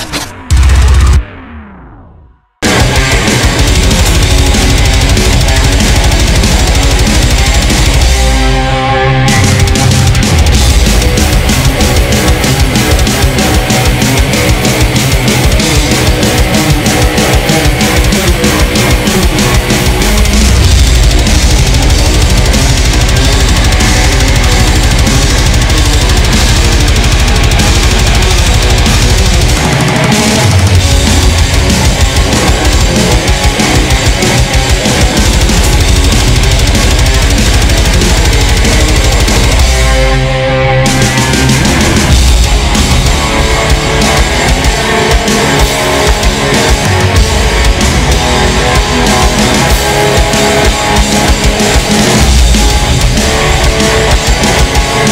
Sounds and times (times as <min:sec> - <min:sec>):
Guitar: 0:00.0 - 0:55.1.